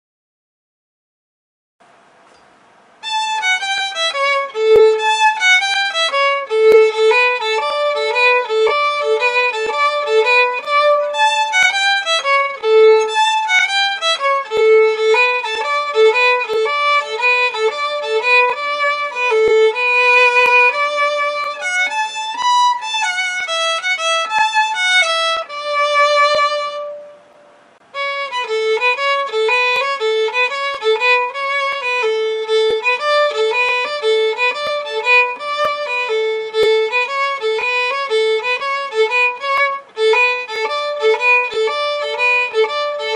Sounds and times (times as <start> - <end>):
Music: 3.0 - 43.1.